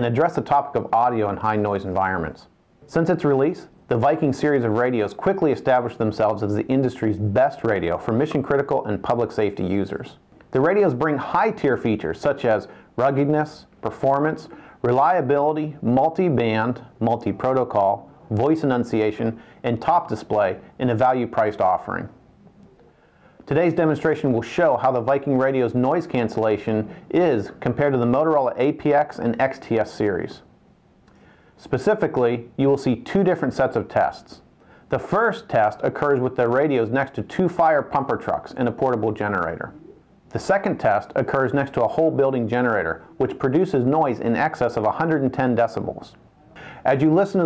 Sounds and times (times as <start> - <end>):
Speech: 0.0 - 22.2, 23.4 - 30.5, 31.6 - 46.2, 46.8 - 47.4.